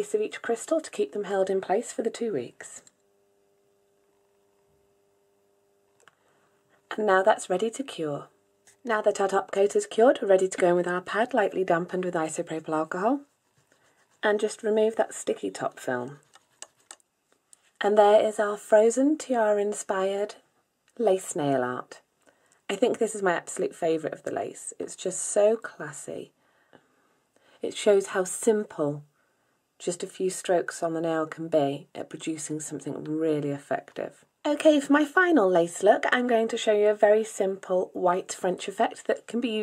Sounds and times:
Speech: 0.0 - 2.9, 6.9 - 13.3, 14.2 - 16.3, 17.8 - 20.4, 21.0 - 22.1, 22.7 - 26.4, 27.6 - 29.1, 29.8 - 39.6.

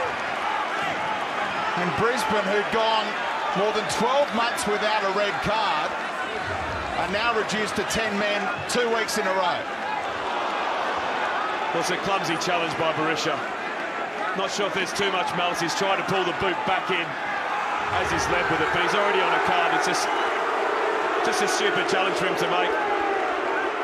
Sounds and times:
Speech: 1.8 - 6.0, 7.0 - 9.7, 11.8 - 13.5, 14.4 - 17.2, 17.9 - 20.2, 21.2 - 22.8.

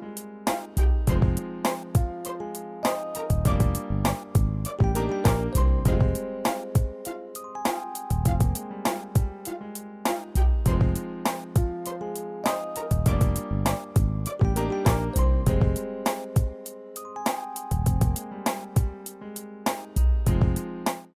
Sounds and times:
Music: 0.0 - 21.1.

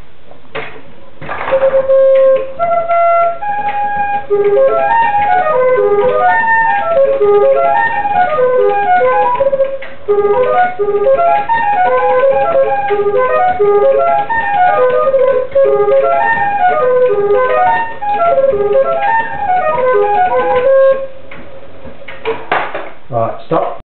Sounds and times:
Flute: 1.4 - 21.2
Speech: 23.1 - 23.8.

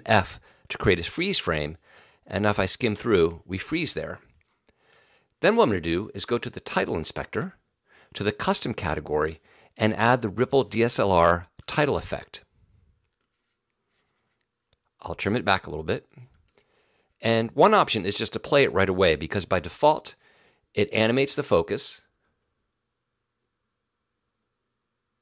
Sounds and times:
Speech: 0.0 - 4.3, 5.4 - 7.6, 8.2 - 12.5, 15.0 - 16.3, 17.2 - 20.2, 20.8 - 22.1.

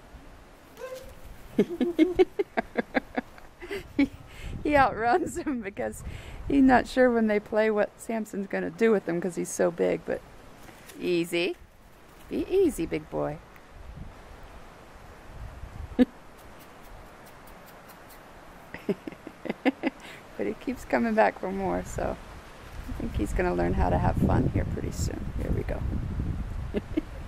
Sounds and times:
Speech: 4.7 - 10.2, 11.0 - 11.6, 12.3 - 13.4, 20.4 - 22.2, 22.9 - 25.8.

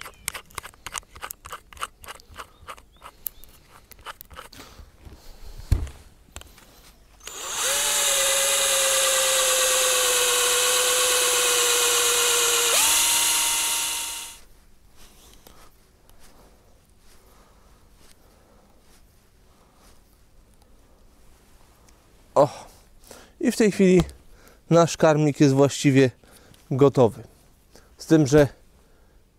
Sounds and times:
Drill: 7.2 - 14.4.

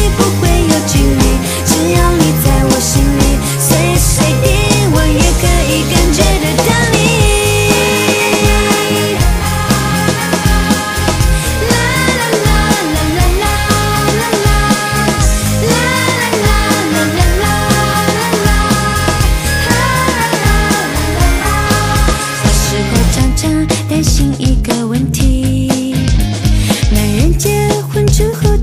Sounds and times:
Music: 0.0 - 28.6.

